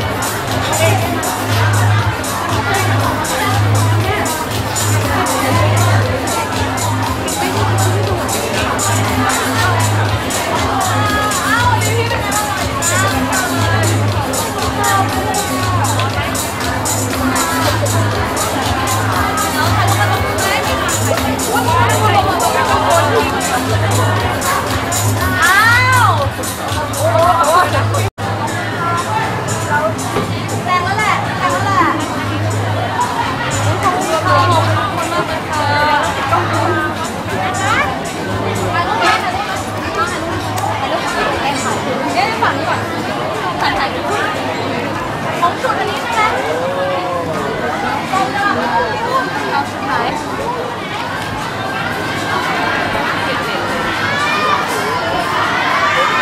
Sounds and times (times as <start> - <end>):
Music: 0.0 - 56.2
Speech: 0.0 - 56.2.